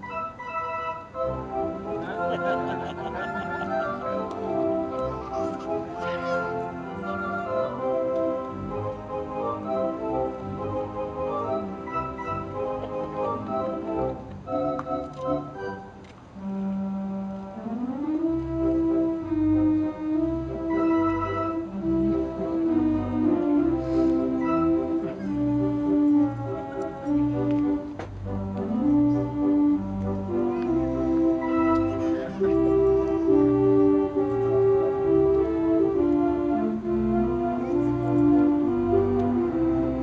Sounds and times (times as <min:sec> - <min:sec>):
Organ: 0:00.0 - 0:40.0
Piano: 0:00.0 - 0:40.0.